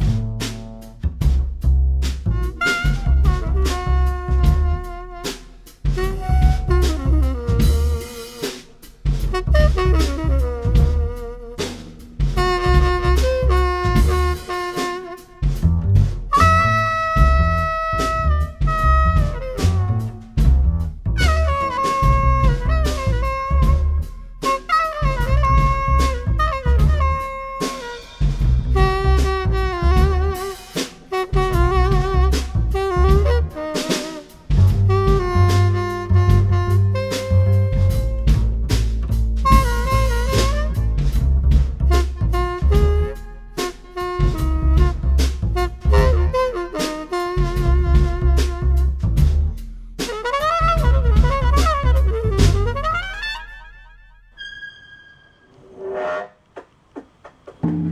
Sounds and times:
Music: 0:00.0 - 0:56.1, 0:57.2 - 0:57.9.

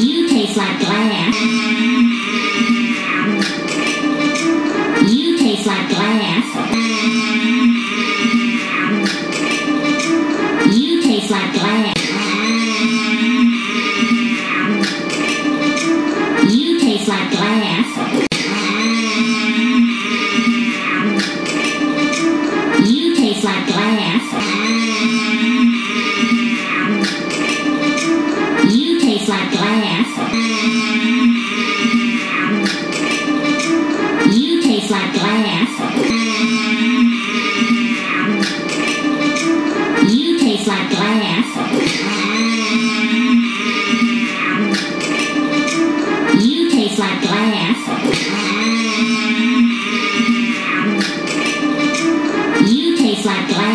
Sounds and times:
Speech: 0:00.0 - 0:03.5, 0:05.0 - 0:09.6, 0:10.6 - 0:14.9, 0:16.4 - 0:21.3, 0:22.7 - 0:27.1, 0:28.6 - 0:33.2, 0:34.2 - 0:38.9, 0:40.0 - 0:45.2, 0:46.3 - 0:51.1, 0:52.6 - 0:53.7
Music: 0:00.0 - 0:53.7.

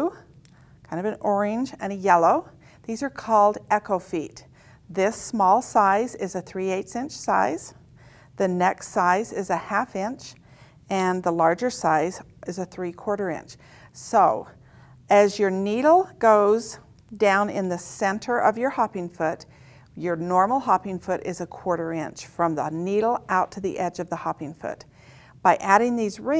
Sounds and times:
Speech: 0:00.0 - 0:00.3, 0:00.9 - 0:07.8, 0:08.4 - 0:24.9, 0:25.5 - 0:26.3.

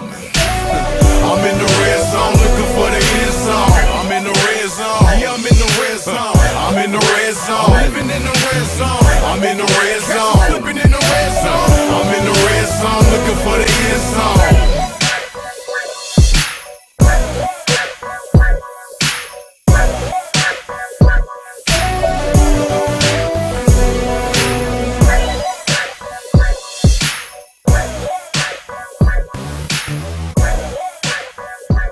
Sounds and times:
Hip hop music: 0:00.0 - 0:31.9.

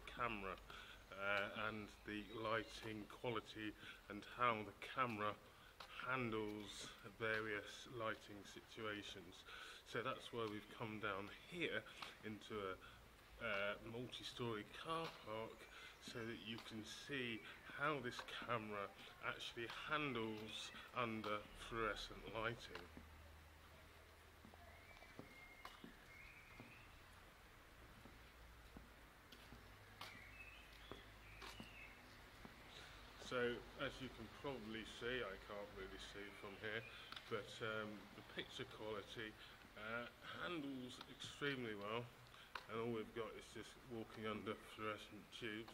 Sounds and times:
Speech: 0:00.0 - 0:12.8, 0:13.4 - 0:22.9, 0:33.2 - 0:42.1, 0:42.7 - 0:45.7.

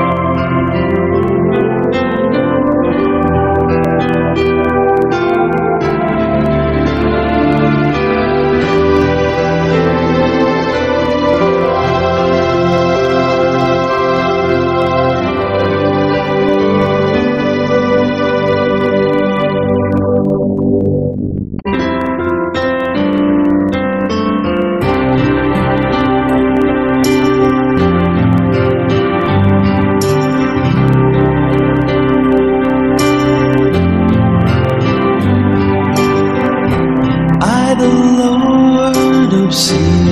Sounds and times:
Music: 0:00.0 - 0:40.1.

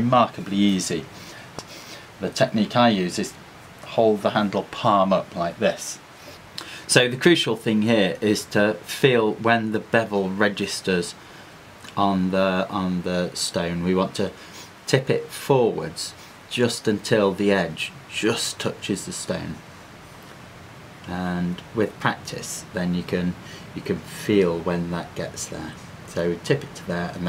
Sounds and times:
Speech: 0:00.0 - 0:01.1, 0:02.2 - 0:06.0, 0:06.9 - 0:11.2, 0:11.9 - 0:19.6, 0:21.1 - 0:27.2.

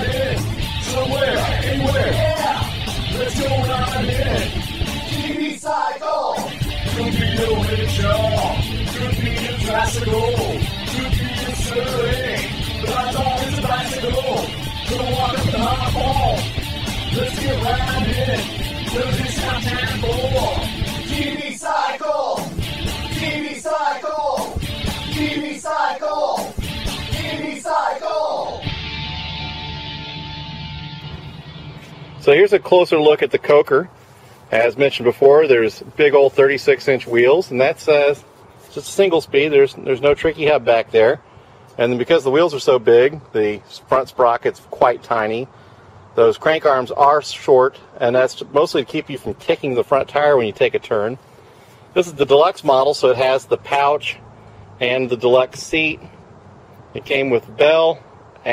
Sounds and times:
Music: 0:00.0 - 0:05.5, 0:06.4 - 0:32.6.

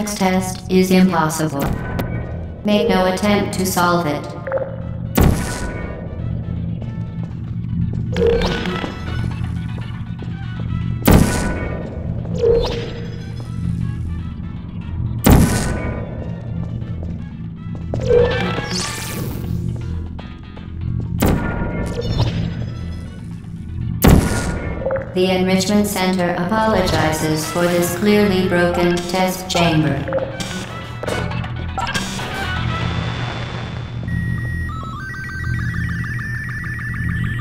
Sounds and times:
Speech: 0:00.0 - 0:01.7, 0:02.7 - 0:04.4, 0:25.2 - 0:30.1
Music: 0:00.0 - 0:37.4.

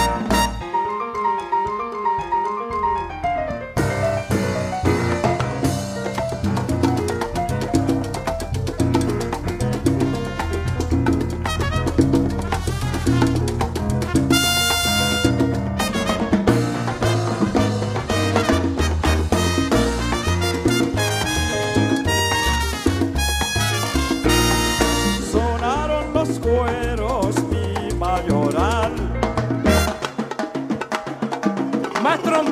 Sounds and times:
Drum kit: 0:00.0 - 0:32.5
Orchestra: 0:00.0 - 0:32.5
Drum: 0:03.3 - 0:32.5.

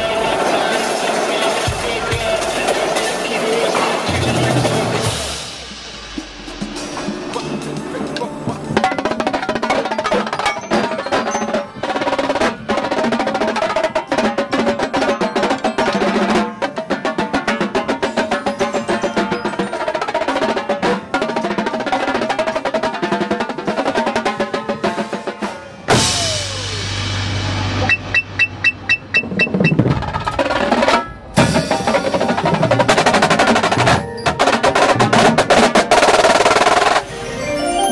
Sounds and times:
Drum roll: 0:00.0 - 0:37.9.

